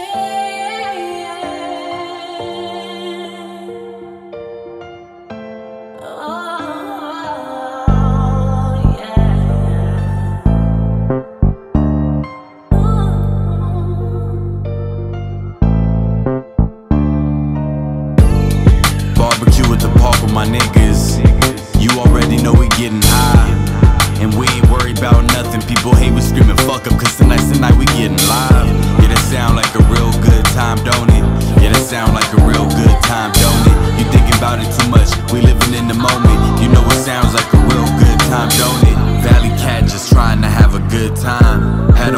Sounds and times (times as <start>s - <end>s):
Jazz: 7.9s - 42.1s.